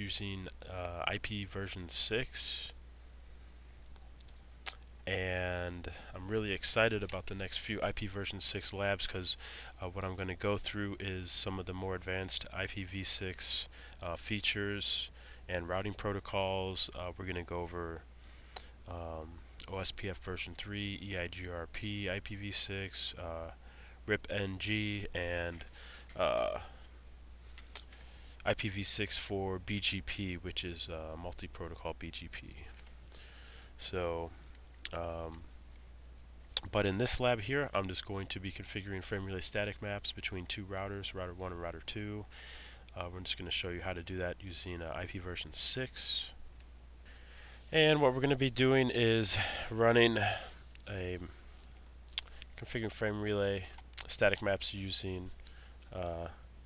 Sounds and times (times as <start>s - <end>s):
Speech: 0.0s - 2.8s, 5.0s - 18.1s, 18.9s - 26.8s, 28.4s - 32.8s, 33.8s - 35.5s, 36.6s - 42.3s, 42.9s - 46.4s, 47.7s - 51.4s, 52.6s - 56.4s.